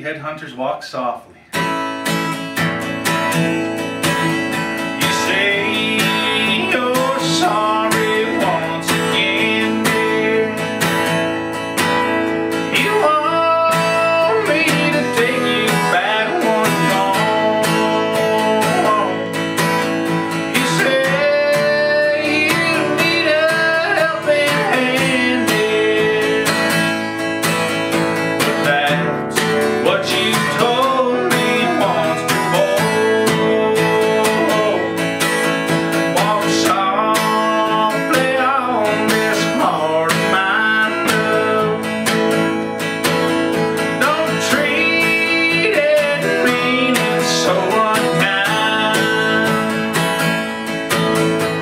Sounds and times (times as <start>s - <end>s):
Music: 1.5s - 51.6s.